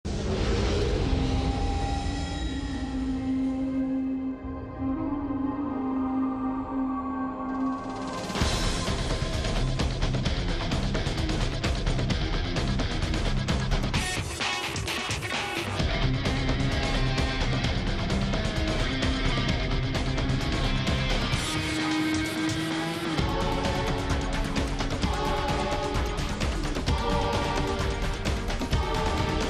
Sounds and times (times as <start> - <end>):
Music: 0.0 - 29.4.